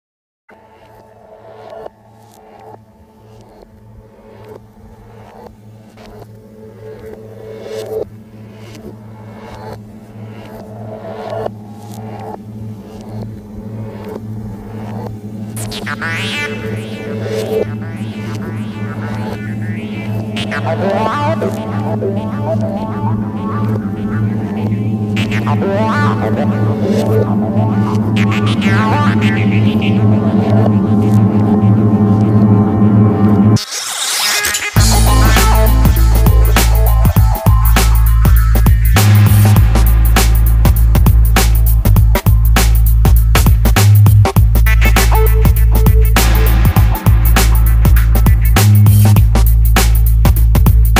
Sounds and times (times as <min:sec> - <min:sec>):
Music: 0:00.5 - 0:50.9.